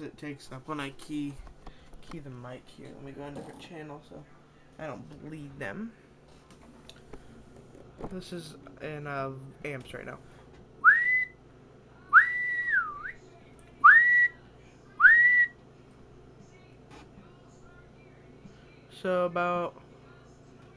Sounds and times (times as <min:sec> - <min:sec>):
Whistling: 0:10.8 - 0:11.4, 0:12.1 - 0:13.2, 0:13.8 - 0:14.4, 0:15.0 - 0:15.6.